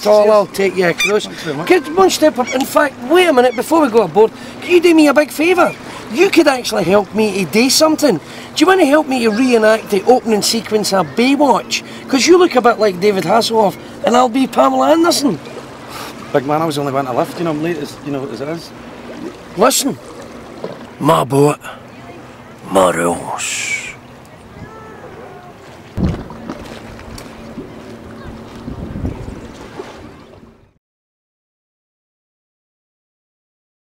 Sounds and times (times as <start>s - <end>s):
Speech: 0.0s - 15.4s, 21.0s - 21.8s, 22.6s - 24.0s.